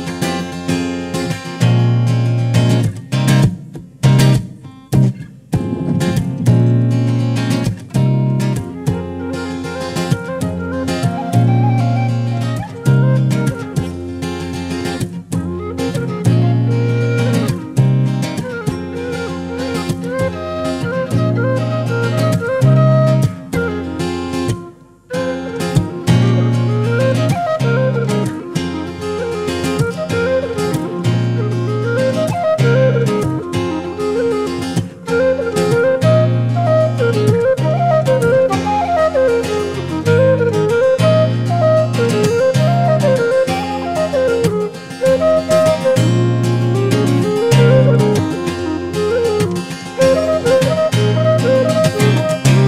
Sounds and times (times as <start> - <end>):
Music: 0.0 - 52.6.